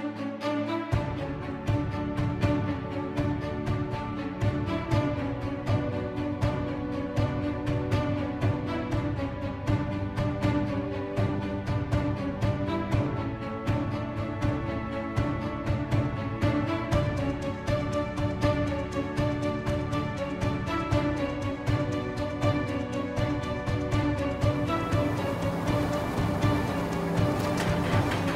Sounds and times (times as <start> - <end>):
Music: 0.0 - 28.3.